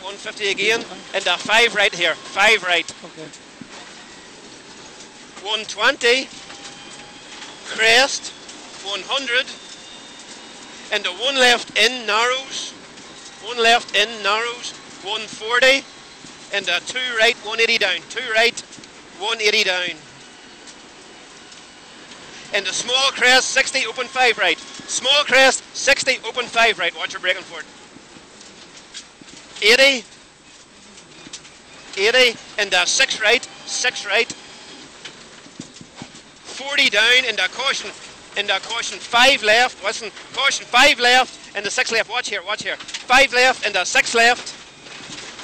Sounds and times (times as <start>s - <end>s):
Speech: 0.0s - 3.4s, 5.4s - 6.3s, 7.7s - 9.6s, 10.9s - 12.7s, 13.4s - 15.8s, 16.5s - 18.6s, 19.2s - 20.0s, 22.5s - 27.6s, 29.6s - 30.1s, 32.0s - 34.4s, 36.5s - 44.6s.